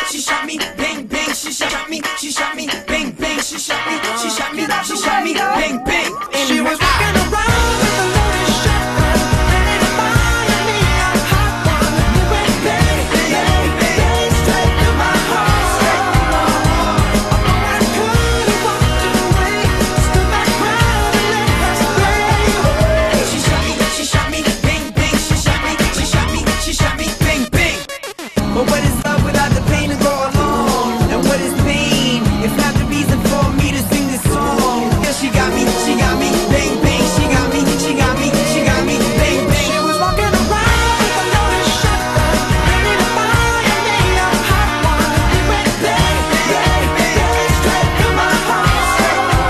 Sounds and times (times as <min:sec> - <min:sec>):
Music: 0:00.0 - 0:49.5.